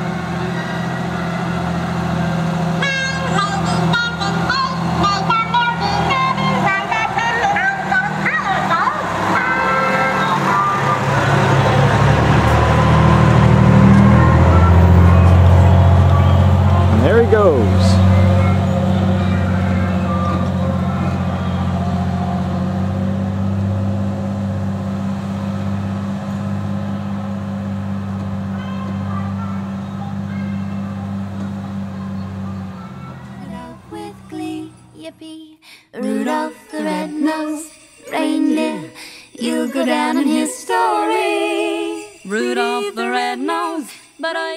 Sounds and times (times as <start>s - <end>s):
Emergency vehicle: 0.0s - 35.0s
Truck: 0.0s - 35.3s.